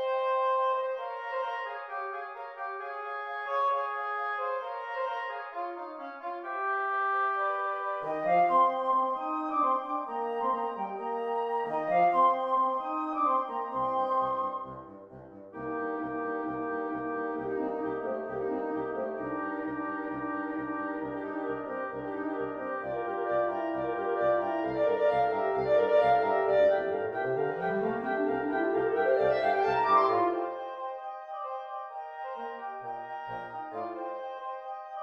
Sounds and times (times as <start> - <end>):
Wind instrument, woodwind instrument: 0.0 - 35.0.